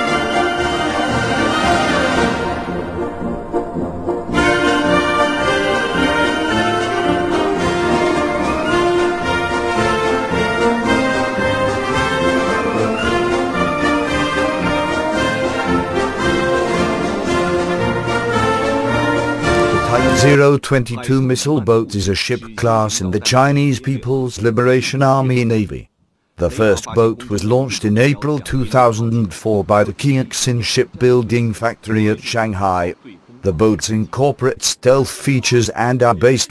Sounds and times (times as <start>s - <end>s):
Speech: 19.7s - 36.5s.